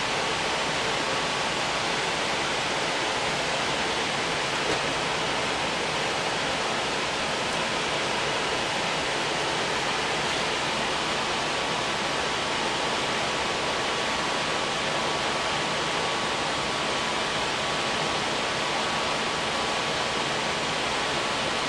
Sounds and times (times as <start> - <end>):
Pink noise: 0.0 - 21.6.